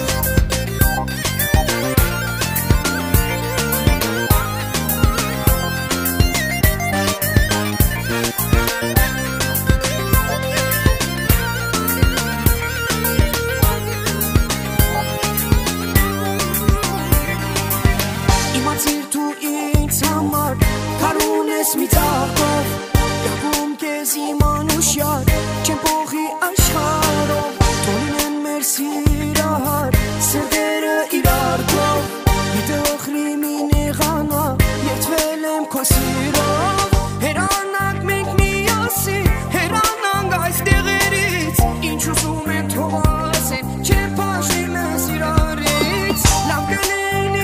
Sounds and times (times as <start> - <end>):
Music: 0.0 - 47.4.